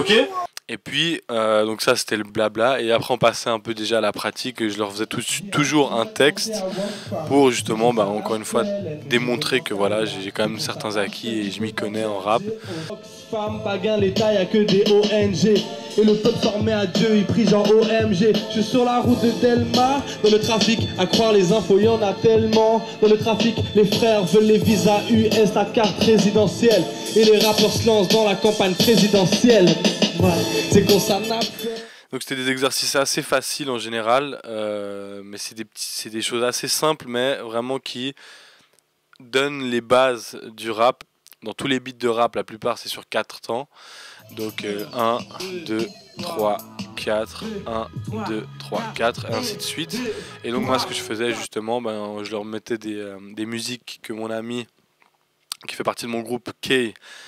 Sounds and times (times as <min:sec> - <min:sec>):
Speech: 0:00.0 - 0:12.8, 0:32.1 - 0:38.2, 0:39.2 - 0:54.7, 0:55.5 - 0:57.0
Music: 0:06.5 - 0:31.9, 0:44.2 - 0:51.5.